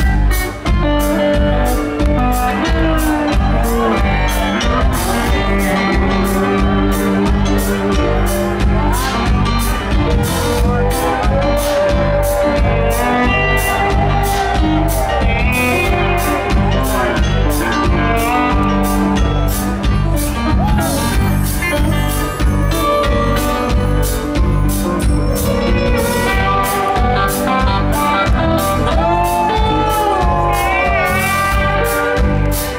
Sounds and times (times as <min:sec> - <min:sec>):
Rhythm and blues: 0:00.0 - 0:32.7.